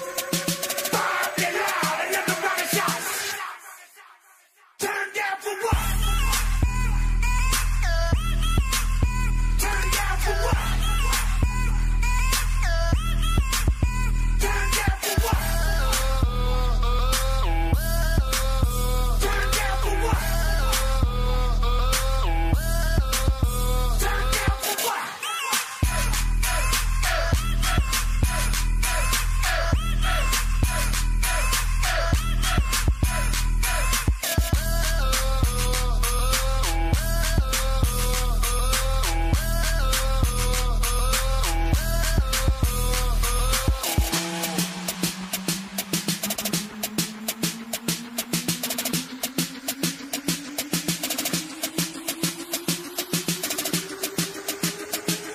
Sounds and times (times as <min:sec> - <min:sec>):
Music: 0:00.0 - 0:55.3.